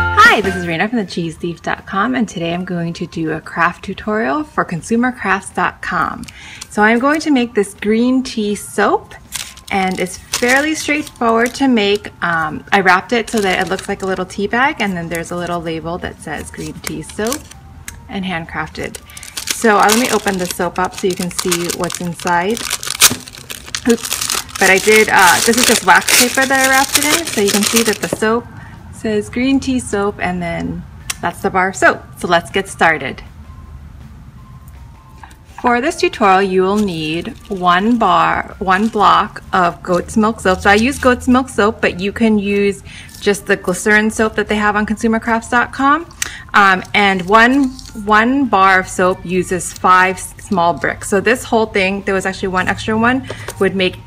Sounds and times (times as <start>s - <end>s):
Speech: 0.2s - 6.2s, 23.9s - 28.4s, 29.0s - 33.3s, 35.6s - 54.0s.